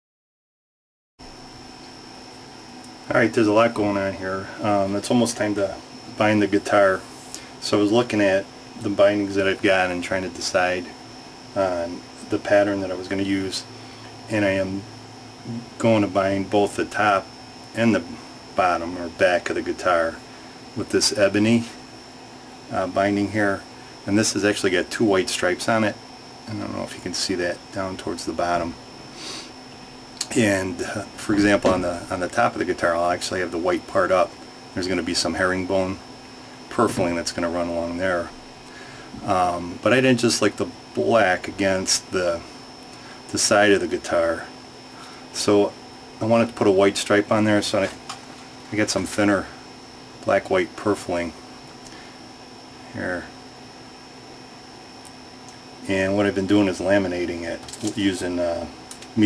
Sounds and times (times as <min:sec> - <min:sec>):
Speech: 0:03.1 - 0:11.0, 0:11.6 - 0:13.7, 0:14.3 - 0:14.9, 0:15.5 - 0:20.2, 0:20.8 - 0:21.8, 0:22.7 - 0:28.8, 0:30.2 - 0:36.0, 0:36.7 - 0:38.4, 0:39.2 - 0:42.5, 0:43.3 - 0:44.6, 0:45.4 - 0:48.0, 0:48.7 - 0:49.6, 0:50.2 - 0:51.4, 0:52.9 - 0:53.4, 0:55.8 - 0:59.2.